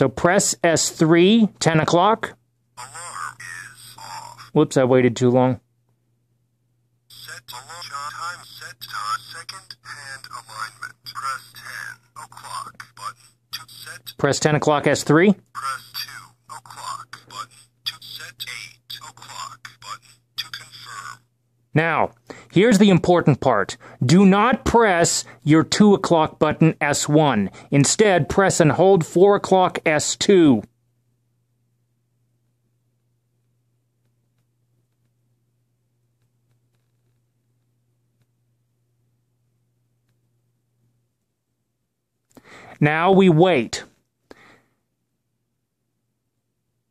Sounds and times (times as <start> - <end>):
Speech: 0.0 - 5.6, 7.1 - 30.7, 42.8 - 43.9.